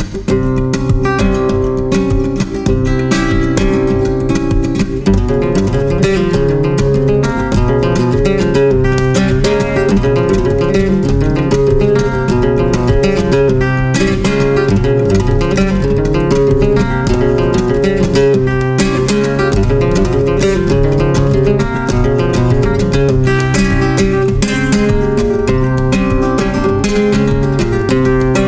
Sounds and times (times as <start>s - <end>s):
Acoustic guitar: 0.0s - 28.4s
Strum: 0.0s - 28.4s.